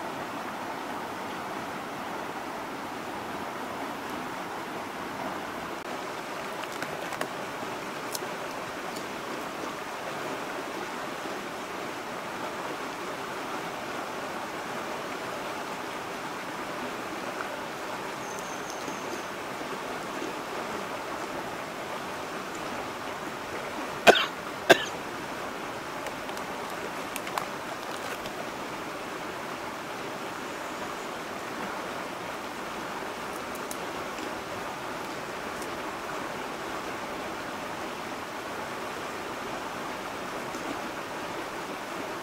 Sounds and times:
Stream: 0.0s - 42.2s.

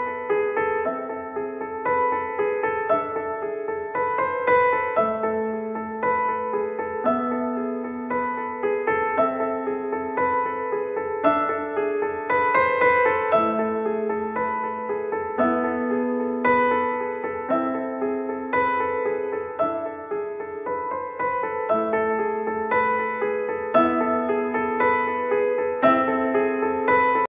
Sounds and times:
Music: 0.0s - 27.2s.

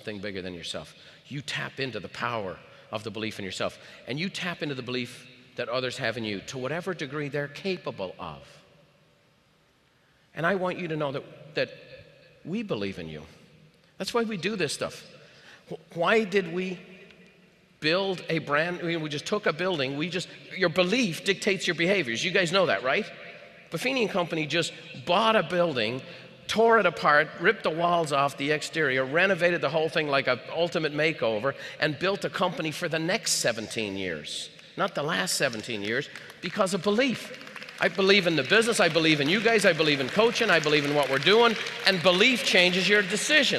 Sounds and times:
Speech: 0.0s - 8.5s, 10.4s - 11.7s, 12.5s - 13.3s, 14.0s - 15.1s, 15.7s - 16.8s, 17.8s - 23.1s, 23.7s - 43.5s.

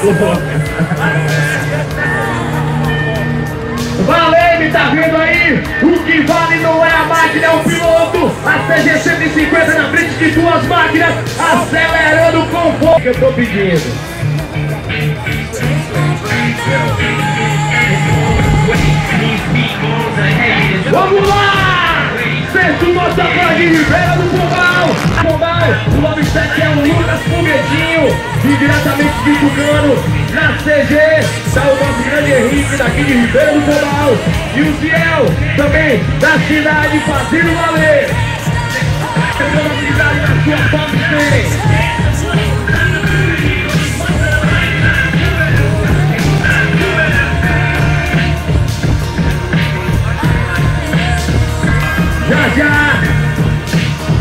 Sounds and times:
Rock and roll: 0.0s - 54.2s.

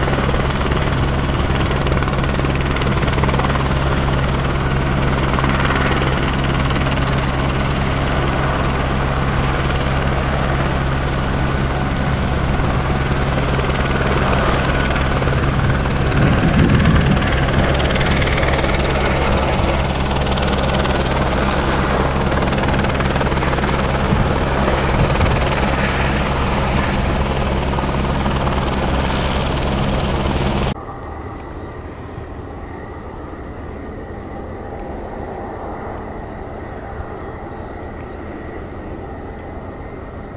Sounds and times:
Aircraft engine: 0.0s - 40.3s
Helicopter: 0.0s - 40.3s.

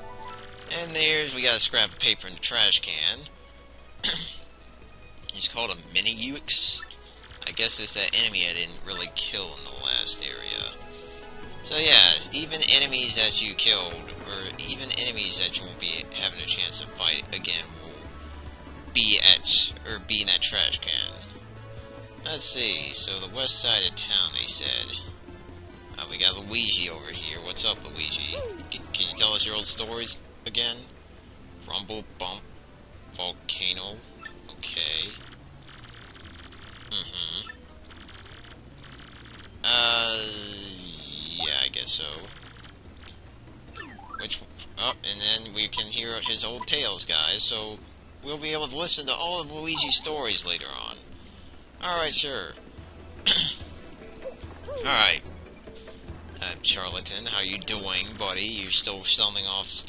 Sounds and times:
Music: 0.0s - 59.8s
Speech: 0.7s - 3.3s, 5.3s - 10.8s, 11.6s - 18.0s, 19.0s - 21.3s, 22.3s - 25.1s, 26.0s - 30.9s, 31.7s - 32.4s, 33.2s - 35.2s, 36.9s - 37.5s, 39.6s - 42.3s, 44.2s - 51.0s, 51.8s - 52.6s, 54.7s - 55.2s, 56.4s - 59.8s.

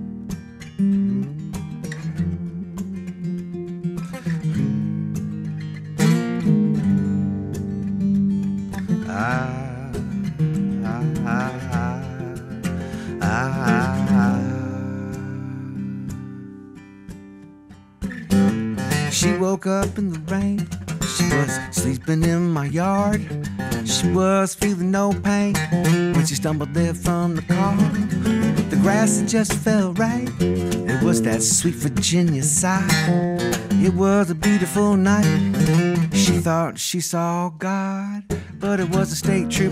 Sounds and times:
Strum: 0.0s - 16.6s, 25.3s - 36.6s
Acoustic guitar: 0.0s - 39.7s.

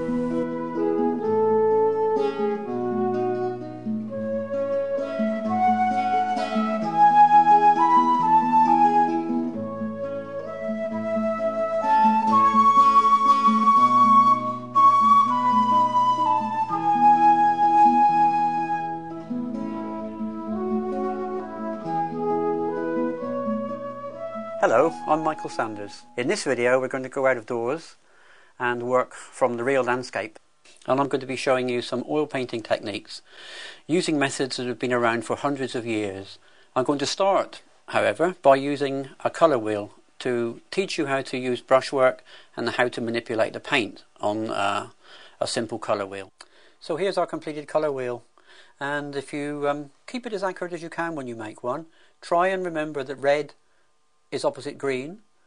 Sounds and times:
Music: 0.0s - 26.9s
Speech: 24.6s - 28.0s, 28.6s - 33.3s, 33.9s - 48.2s, 48.8s - 53.6s, 54.3s - 55.2s.

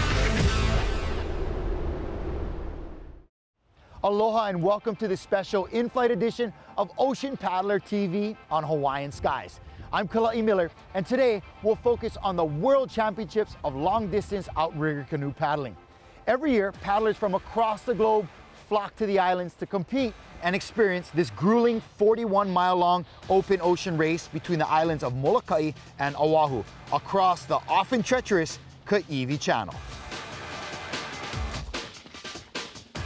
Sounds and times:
Music: 0.0s - 2.0s, 3.8s - 33.0s
Speech: 4.0s - 29.8s.

